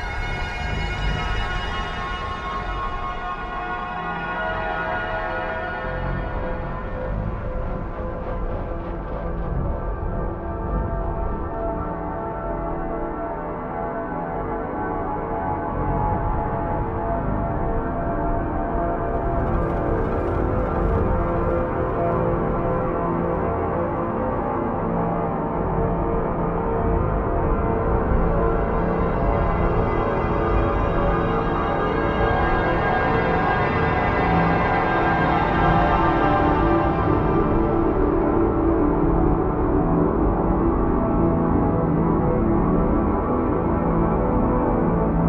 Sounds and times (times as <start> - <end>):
Music: 0.0 - 45.2.